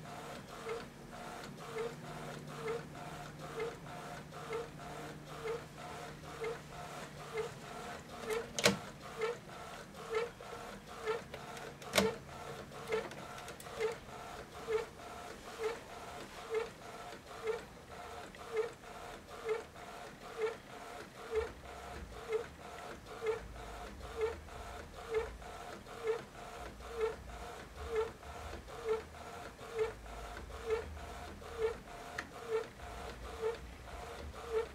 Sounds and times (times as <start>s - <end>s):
Printer: 0.0s - 34.7s.